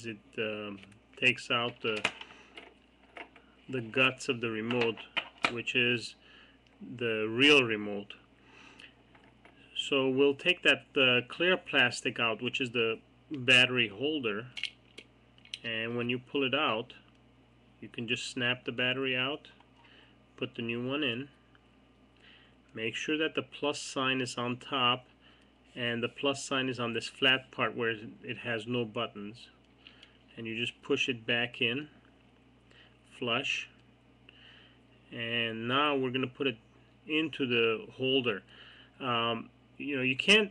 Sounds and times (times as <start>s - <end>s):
Speech: 0.0s - 2.1s, 3.7s - 6.2s, 6.8s - 8.2s, 9.7s - 14.6s, 15.6s - 17.1s, 17.8s - 19.6s, 20.4s - 21.4s, 22.7s - 25.1s, 25.8s - 29.6s, 30.3s - 32.0s, 33.1s - 33.8s, 35.1s - 40.5s.